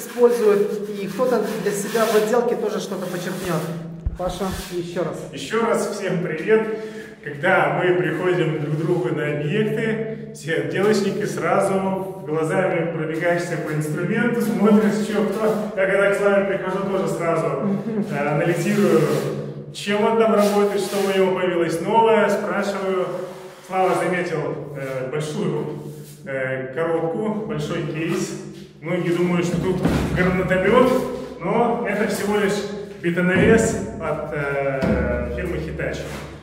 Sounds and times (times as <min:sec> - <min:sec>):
Speech: 0:00.0 - 0:36.2.